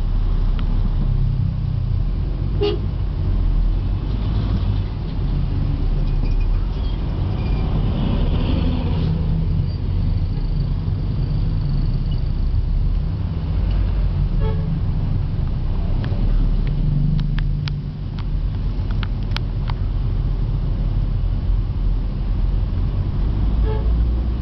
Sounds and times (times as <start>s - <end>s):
Motorcycle: 0.0s - 24.4s
Outside, urban or manmade: 0.0s - 24.4s.